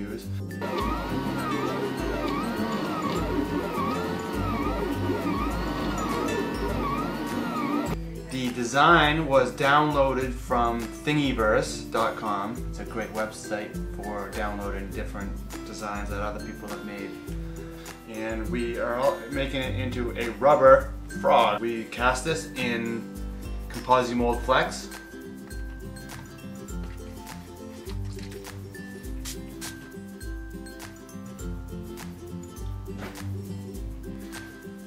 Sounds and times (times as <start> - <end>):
Speech: 0.0 - 0.3, 8.3 - 17.2, 18.1 - 23.1, 23.7 - 25.0
Music: 0.0 - 34.8.